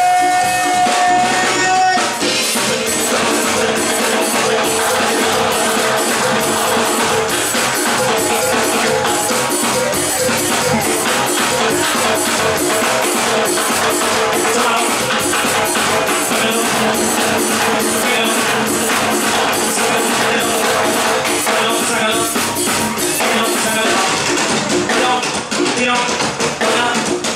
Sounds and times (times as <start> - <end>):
Music: 0.0 - 27.3.